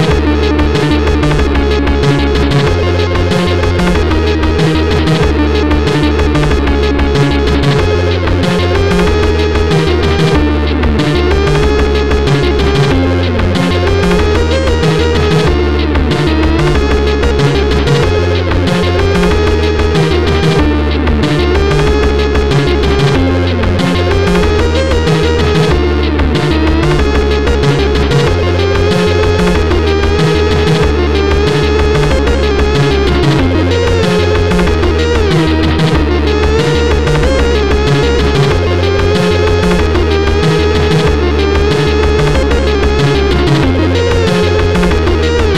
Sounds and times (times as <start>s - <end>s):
Independent music: 0.0s - 45.5s.